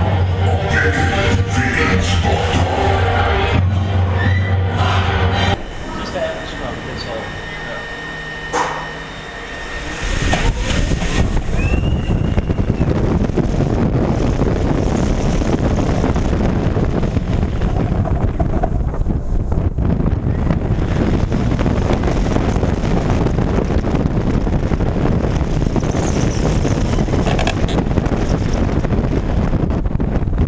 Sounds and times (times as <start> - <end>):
Outside, rural or natural: 5.6 - 30.4
Speech: 5.9 - 7.9.